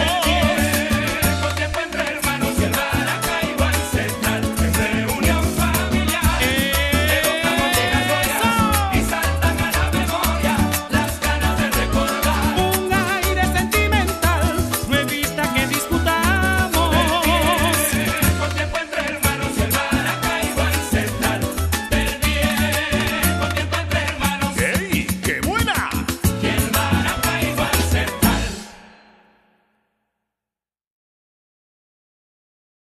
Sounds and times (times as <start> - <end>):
Salsa music: 0.0 - 29.6.